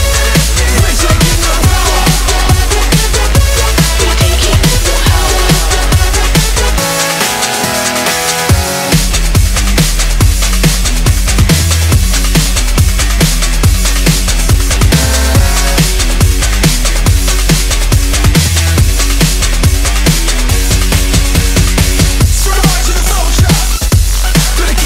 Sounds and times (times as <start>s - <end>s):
Drum and bass: 0.0s - 24.8s.